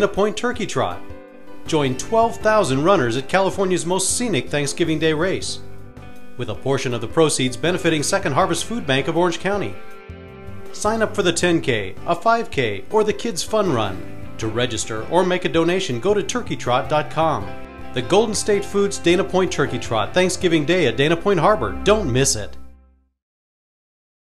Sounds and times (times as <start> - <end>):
Speech: 0.0 - 1.0, 1.7 - 5.6, 6.4 - 9.8, 10.8 - 22.6
Music: 0.0 - 23.2.